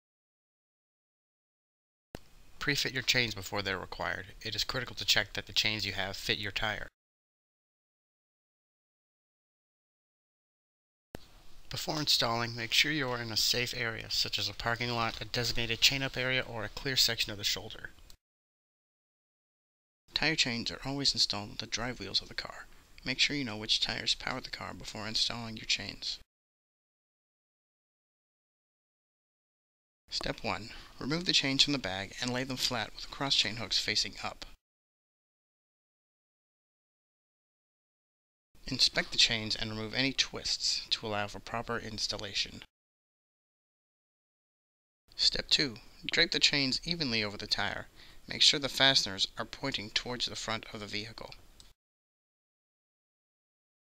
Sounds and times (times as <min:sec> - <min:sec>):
Speech: 0:02.6 - 0:07.0, 0:11.7 - 0:18.0, 0:20.1 - 0:26.3, 0:30.1 - 0:34.6, 0:38.6 - 0:42.7, 0:45.1 - 0:51.4.